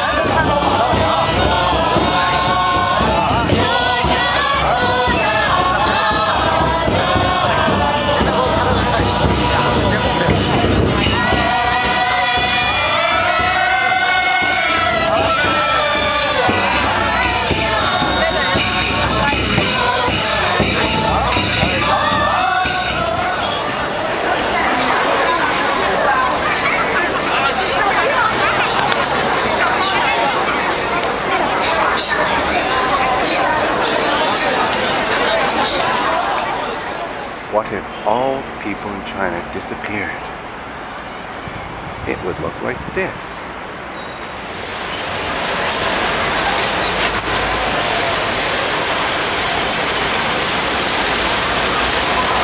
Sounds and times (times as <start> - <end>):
Speech: 0.0 - 22.6, 23.2 - 40.3, 42.0 - 43.4
Music: 0.0 - 24.1.